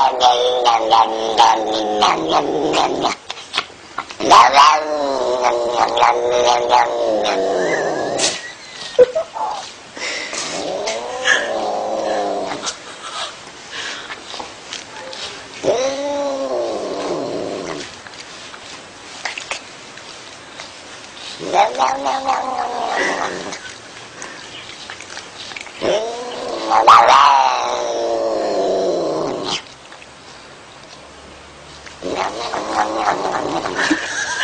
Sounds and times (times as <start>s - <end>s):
Caterwaul: 0.0s - 3.2s, 4.2s - 8.4s, 15.6s - 17.9s, 21.4s - 23.6s, 25.8s - 29.6s, 32.0s - 34.0s.